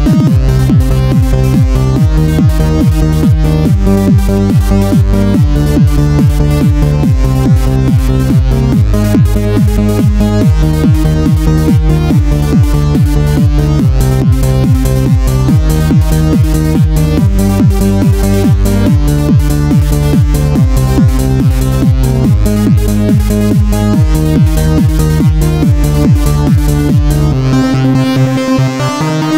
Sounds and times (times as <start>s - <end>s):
Exciting music: 0.0s - 29.3s.